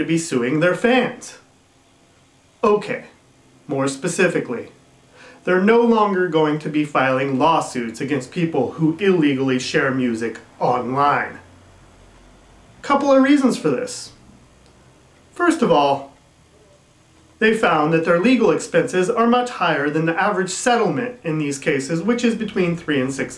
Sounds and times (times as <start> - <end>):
Speech: 0.0 - 1.4, 2.6 - 4.8, 5.4 - 11.5, 12.8 - 14.2, 15.4 - 16.8, 17.4 - 23.3.